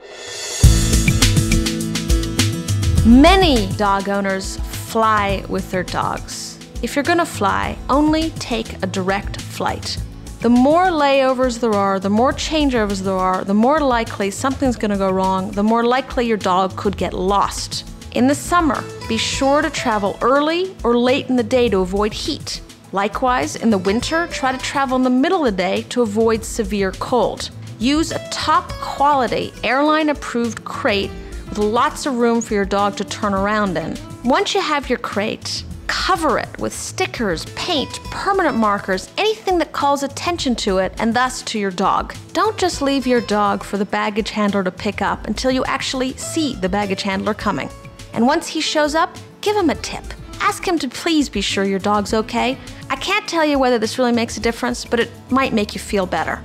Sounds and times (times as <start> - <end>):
Music: 0.0 - 56.4
Speech: 3.0 - 56.4.